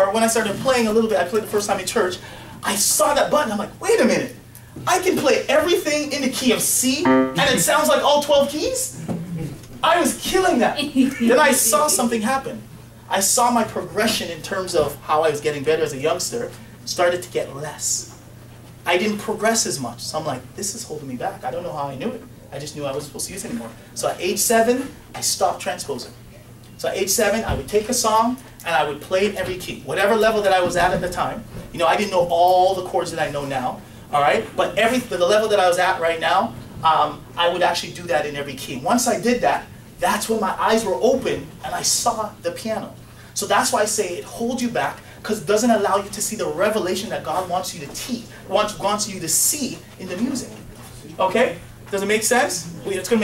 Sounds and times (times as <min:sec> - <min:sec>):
Speech: 0:00.0 - 0:18.2, 0:18.8 - 0:26.2, 0:26.8 - 0:53.2.